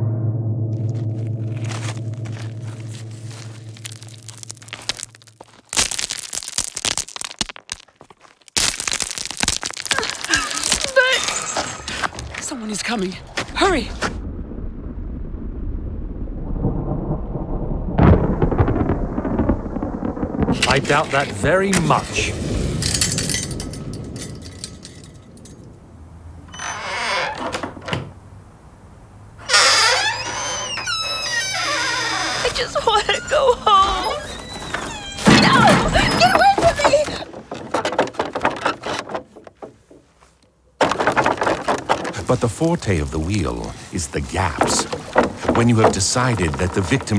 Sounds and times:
Speech: 12.4 - 14.0, 20.6 - 22.4, 32.4 - 34.2, 42.2 - 44.9, 45.5 - 47.1.

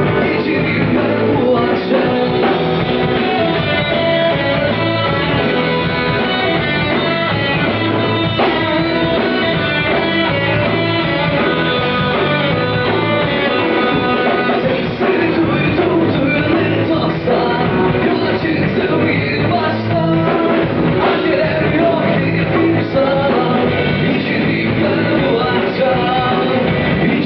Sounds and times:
Punk rock: 0.0 - 27.2
Rock and roll: 0.0 - 27.2.

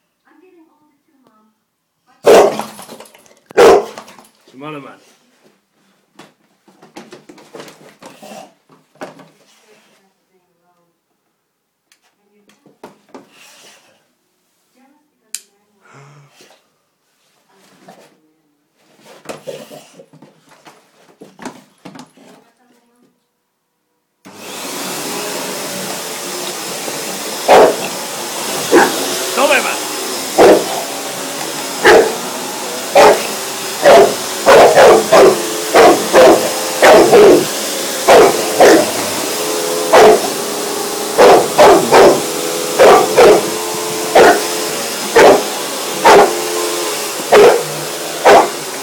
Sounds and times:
Dog: 2.3 - 2.8, 3.6 - 4.2, 27.5 - 27.9, 28.7 - 29.0, 30.3 - 30.8, 31.8 - 32.2, 33.0 - 37.5, 38.1 - 38.9, 39.9 - 40.3, 41.2 - 43.5, 44.2 - 44.5, 45.2 - 46.4, 47.3 - 48.6.

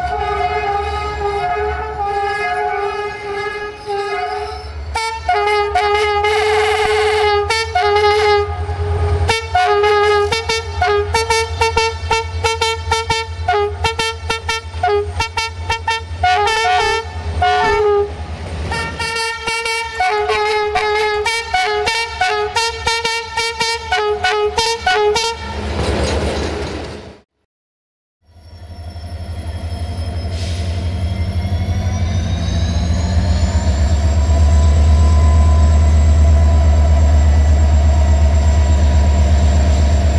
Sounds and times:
Railroad car, train wagon: 0.0 - 27.3, 28.2 - 40.1
Train: 0.0 - 27.3, 28.2 - 40.1.

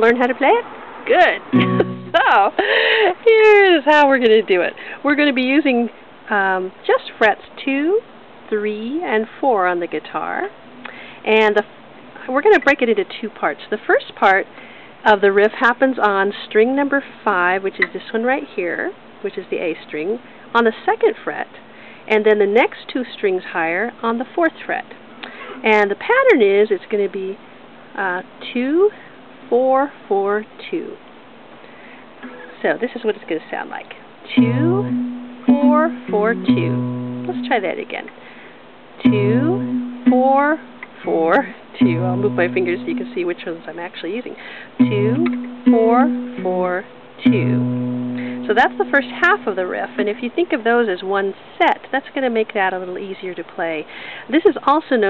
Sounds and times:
Speech: 0.0 - 1.4, 2.2 - 10.6, 11.2 - 25.0, 25.6 - 31.0, 32.5 - 34.9, 35.5 - 38.1, 39.0 - 47.7, 48.4 - 55.0.

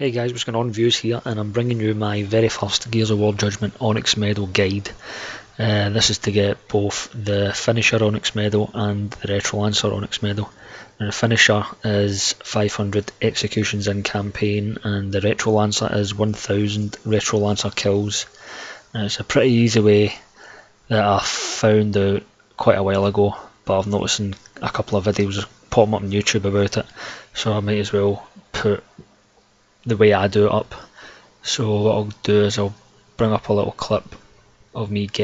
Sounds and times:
Speech: 0.0 - 5.0, 5.6 - 20.3, 20.9 - 29.0, 29.8 - 35.2.

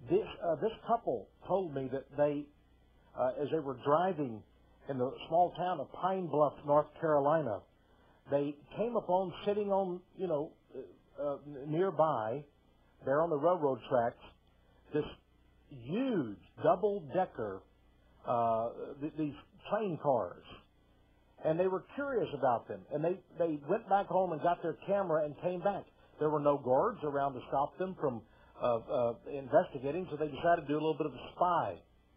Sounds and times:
Speech: 0.0 - 2.6, 3.2 - 20.7, 21.4 - 31.9.

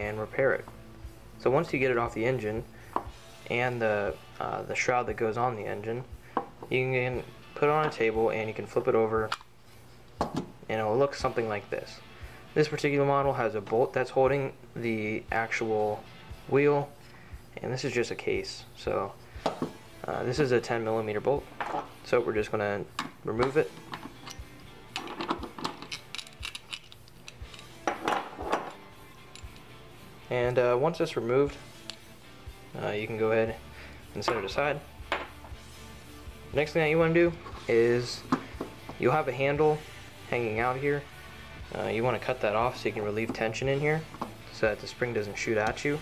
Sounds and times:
Speech: 0.0 - 0.6, 1.4 - 2.6, 3.5 - 6.1, 6.7 - 9.3, 10.7 - 12.0, 12.6 - 16.9, 17.6 - 19.2, 20.1 - 21.5, 22.1 - 23.7, 30.3 - 31.6, 32.8 - 33.6, 34.2 - 34.8, 36.6 - 38.2, 39.0 - 41.1, 41.7 - 46.0.

